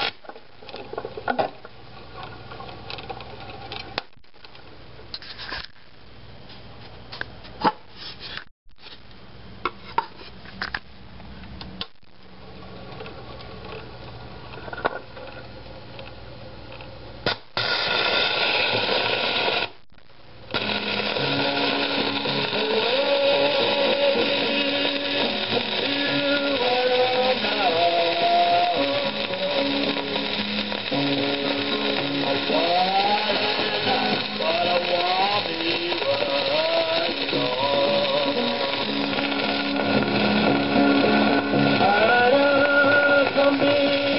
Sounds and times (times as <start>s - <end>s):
Music: 20.6s - 44.1s.